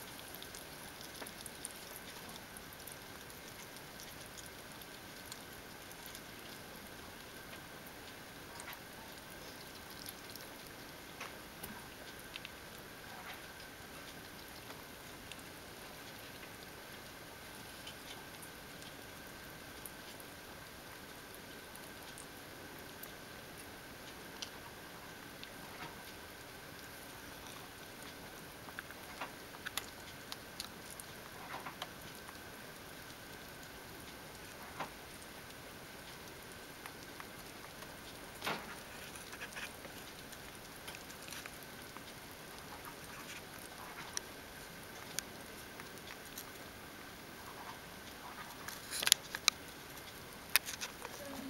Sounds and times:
Patter: 0.0s - 51.4s.

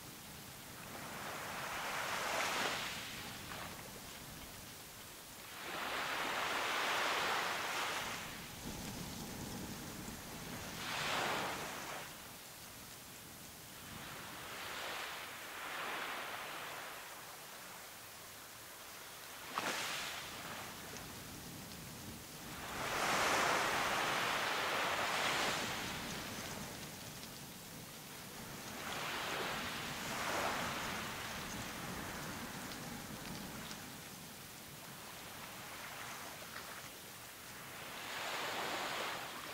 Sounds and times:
Outside, rural or natural: 0.0s - 39.5s.

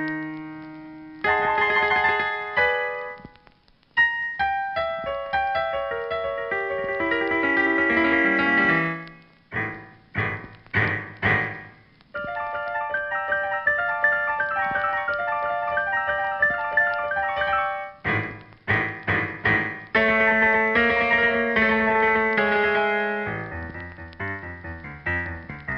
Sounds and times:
Music: 0.0s - 25.7s.

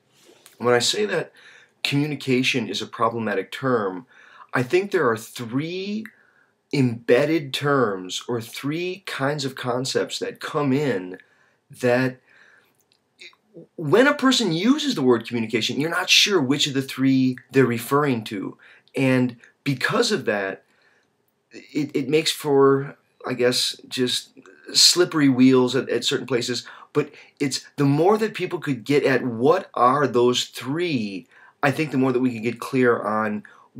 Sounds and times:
Narration, monologue: 0.0s - 33.7s
Male speech, man speaking: 0.6s - 1.3s, 1.9s - 6.1s, 6.8s - 11.2s, 11.8s - 12.2s, 13.6s - 20.6s, 21.6s - 33.7s.

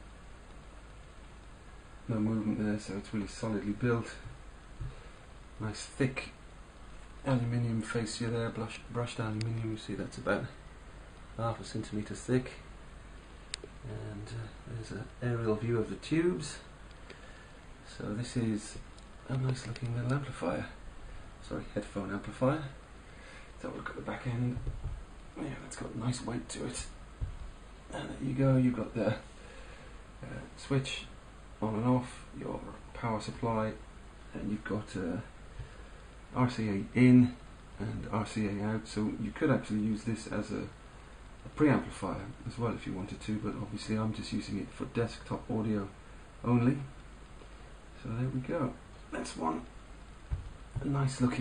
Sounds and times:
Inside, small room: 0.0s - 51.4s
Speech: 2.1s - 4.4s, 5.6s - 6.4s, 7.2s - 10.6s, 11.4s - 12.7s, 13.8s - 16.7s, 17.9s - 20.8s, 21.4s - 22.8s, 23.6s - 24.8s, 25.4s - 27.0s, 27.9s - 29.3s, 30.2s - 35.4s, 36.3s - 40.8s, 41.4s - 47.0s, 48.0s - 49.7s, 50.8s - 51.4s.

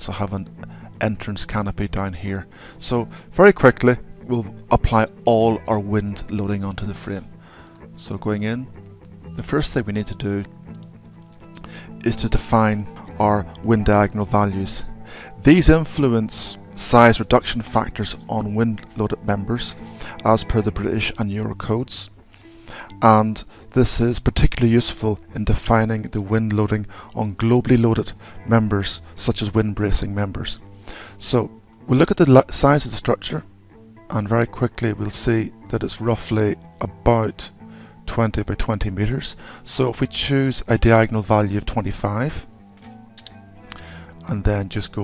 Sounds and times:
Speech: 0.0s - 7.3s, 8.0s - 8.7s, 9.4s - 10.5s, 12.0s - 22.2s, 23.0s - 30.6s, 31.2s - 33.5s, 34.1s - 42.5s, 44.2s - 45.0s
Music: 0.0s - 45.0s.

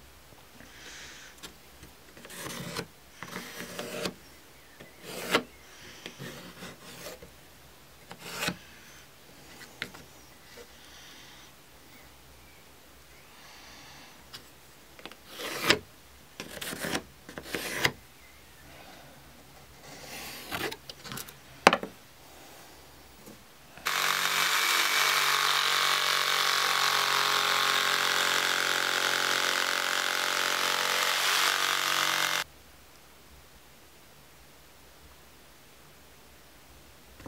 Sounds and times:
Wood: 2.1s - 4.2s, 4.8s - 7.3s, 23.3s - 32.4s
Power tool: 23.8s - 32.5s.

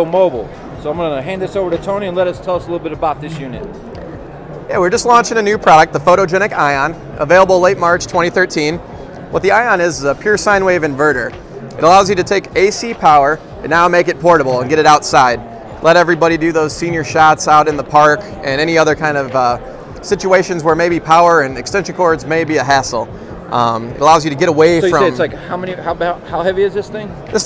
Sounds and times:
Music: 0.0s - 27.4s
Speech: 9.4s - 27.4s.

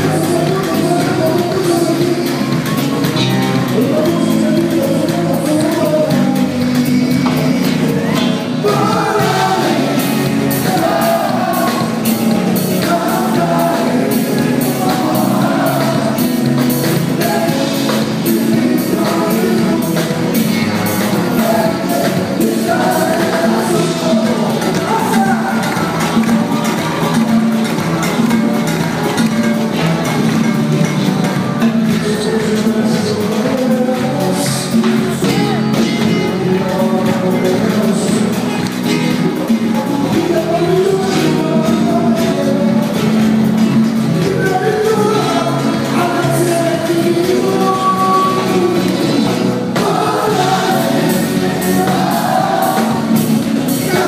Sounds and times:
Funny music: 0.0s - 54.0s.

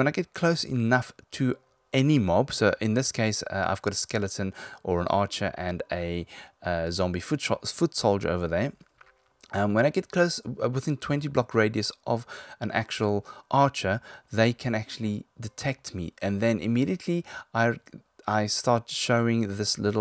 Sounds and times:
Speech: 0.0s - 8.8s, 9.5s - 20.0s.

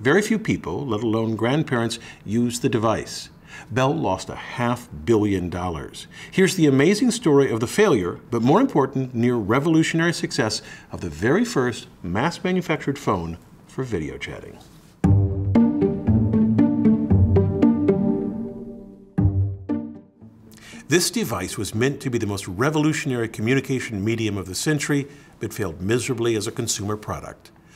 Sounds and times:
Speech: 0.0s - 14.7s, 20.9s - 27.5s
Music: 15.0s - 21.2s.

